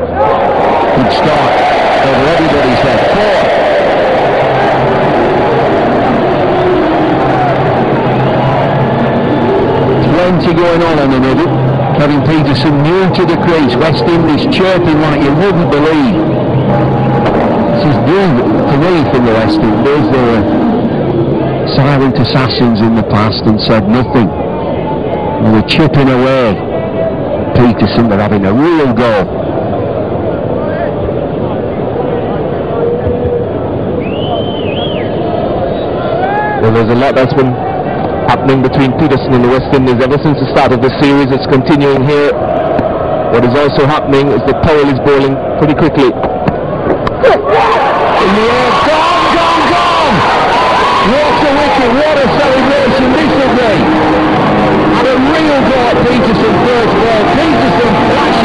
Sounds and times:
Speech: 1.0 - 3.4, 10.0 - 16.2, 17.8 - 20.5, 21.7 - 24.4, 25.4 - 26.6, 27.5 - 29.3, 36.6 - 37.6, 38.3 - 42.4, 43.4 - 46.2, 51.0 - 53.8, 54.9 - 58.4.

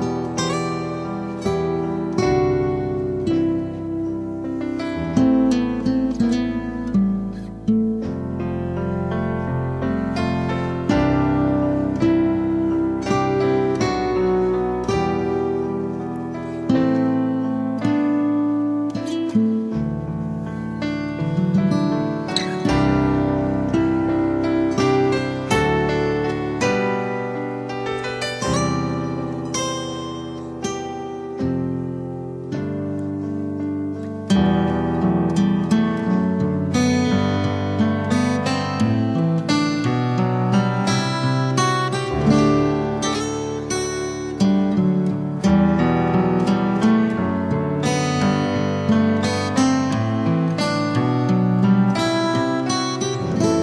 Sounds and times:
Music: 0.0 - 53.6.

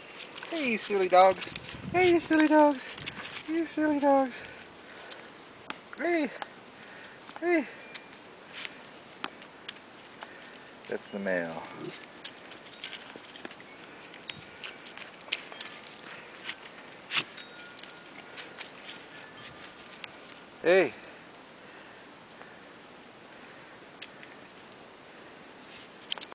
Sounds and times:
Speech: 0.5 - 2.9, 3.5 - 4.4, 6.0 - 6.4, 7.4 - 7.8, 10.9 - 12.0, 20.6 - 21.0.

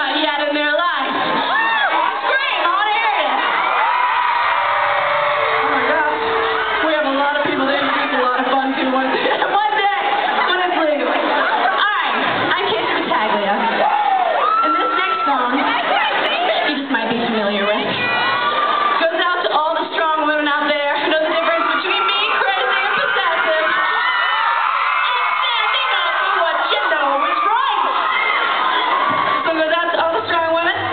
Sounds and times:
Speech: 6.8 - 13.7, 14.6 - 18.0, 19.0 - 23.8, 29.5 - 30.9.

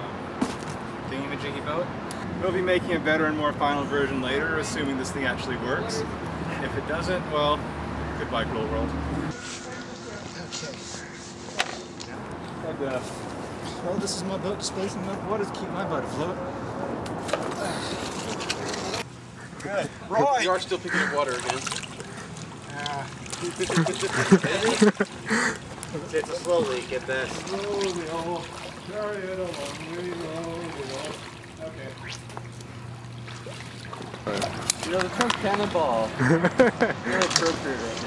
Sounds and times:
Boat, Water vehicle: 17.5 - 38.0.

